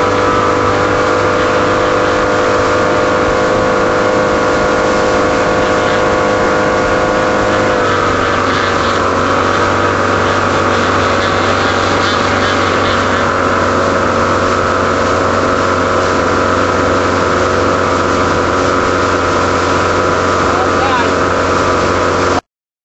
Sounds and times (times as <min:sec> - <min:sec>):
Motorboat, speedboat: 0:00.0 - 0:22.5.